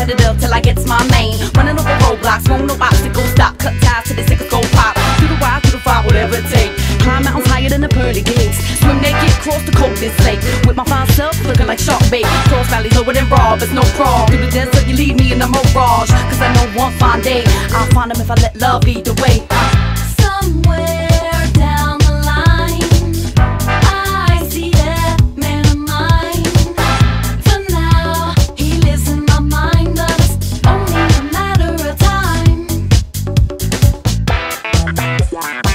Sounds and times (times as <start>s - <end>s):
Disco: 0.0s - 35.7s.